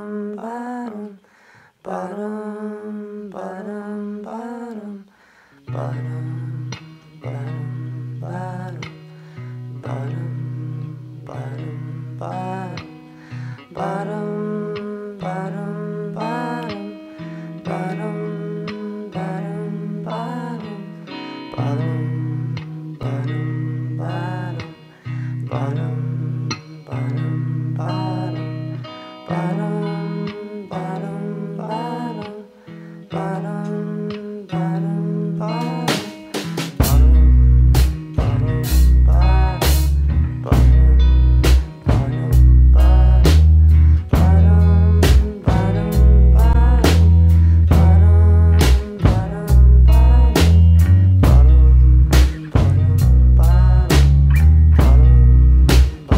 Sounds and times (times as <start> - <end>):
Independent music: 2.1 - 56.1.